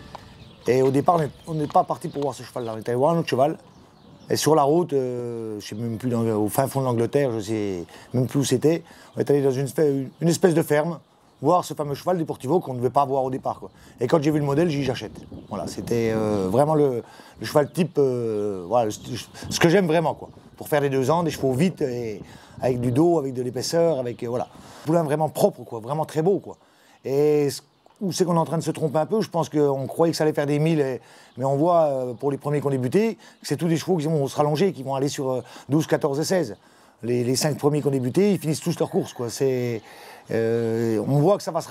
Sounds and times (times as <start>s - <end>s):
Speech: 0.6s - 3.7s, 4.3s - 41.7s.